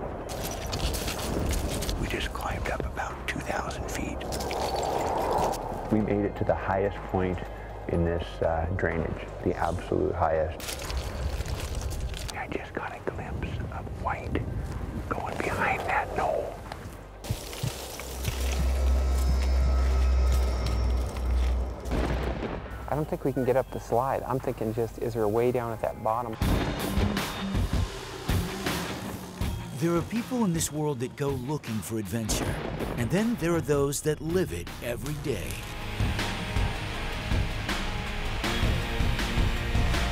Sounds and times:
Music: 6.0s - 10.0s, 15.4s - 40.1s.

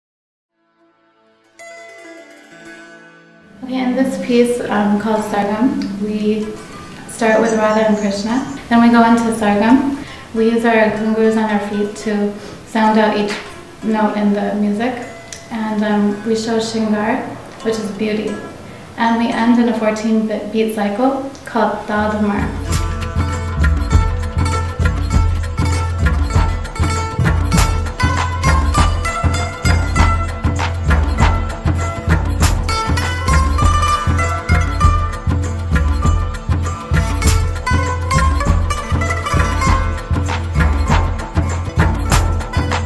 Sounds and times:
Music: 0.5s - 20.7s, 21.7s - 42.8s
Speech: 3.6s - 22.6s.

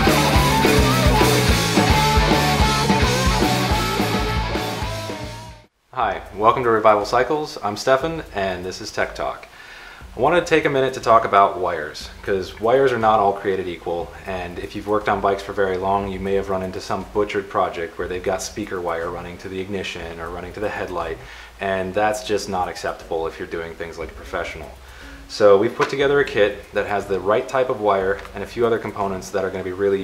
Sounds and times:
Music: 0.0s - 9.2s, 10.0s - 30.0s
Speech: 5.9s - 9.5s, 10.1s - 30.0s.

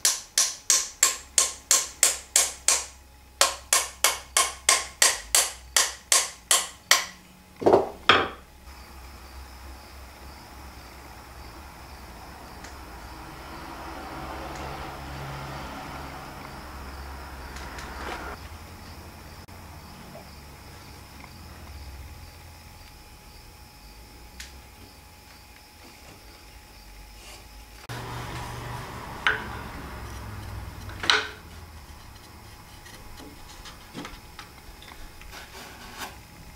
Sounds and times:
Wood: 29.2s - 30.2s, 30.8s - 34.2s
Rub: 35.2s - 36.2s.

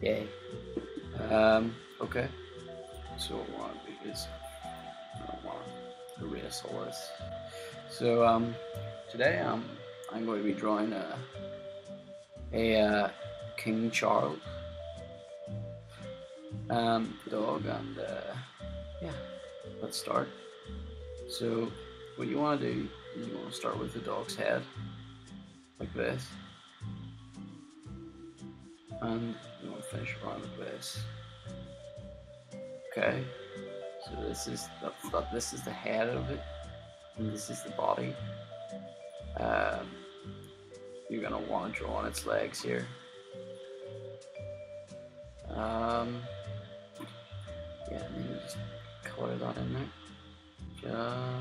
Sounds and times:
Speech: 0.0s - 0.3s, 1.2s - 2.3s, 3.2s - 4.4s, 5.2s - 7.2s, 7.9s - 11.3s, 12.6s - 14.4s, 16.7s - 19.2s, 19.8s - 20.3s, 21.3s - 24.7s, 25.8s - 26.3s, 29.0s - 31.1s, 33.0s - 33.3s, 34.1s - 36.4s, 37.2s - 38.2s, 39.4s - 40.0s, 41.1s - 42.9s, 45.5s - 46.3s, 47.9s - 49.9s, 50.8s - 51.4s
Music: 0.0s - 51.4s.

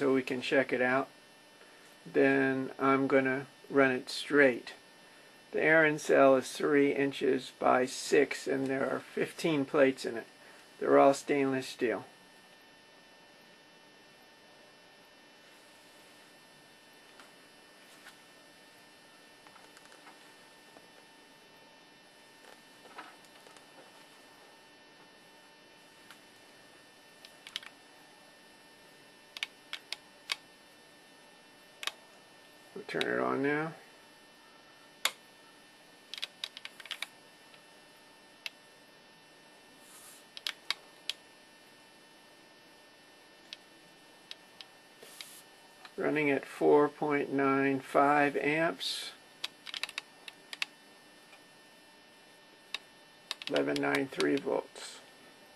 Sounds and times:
Speech: 0.0s - 1.1s, 2.1s - 4.8s, 5.5s - 12.1s, 32.8s - 33.8s, 46.0s - 49.2s, 53.5s - 55.1s.

